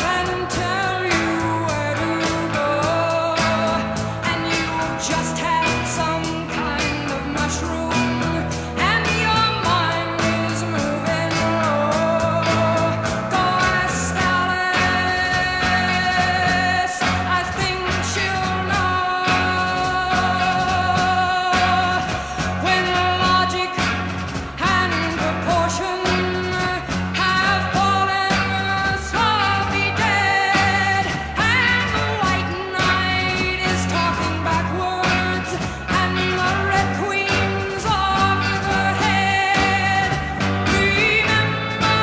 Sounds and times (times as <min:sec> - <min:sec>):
Psychedelic rock: 0:00.0 - 0:42.0.